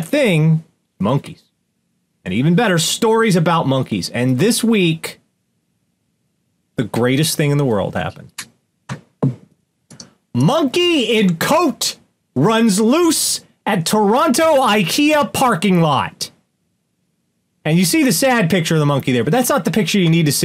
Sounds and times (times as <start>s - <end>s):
Speech: 0.0s - 1.5s, 2.2s - 5.2s, 6.8s - 8.5s, 10.4s - 16.4s, 17.6s - 20.4s
Inside, small room: 0.0s - 20.4s.